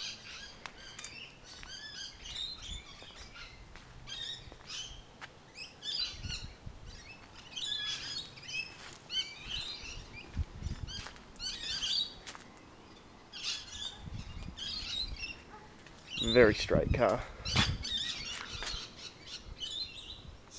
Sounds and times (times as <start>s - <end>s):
Chirp, tweet: 0.0s - 12.2s, 12.8s - 20.5s.